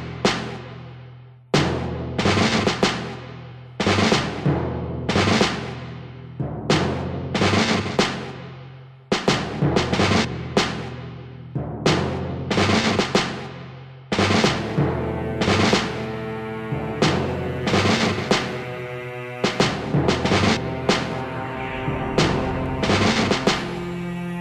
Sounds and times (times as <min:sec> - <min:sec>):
Timpani: 0:01.6 - 0:08.6, 0:09.2 - 0:24.4.